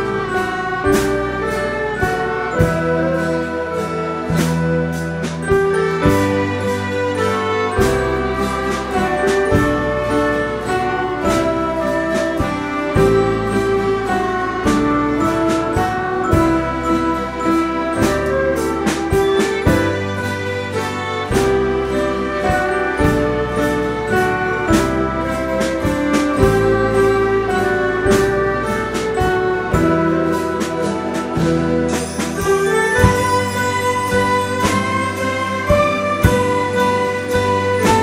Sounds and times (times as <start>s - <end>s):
Wedding music: 0.0s - 38.0s.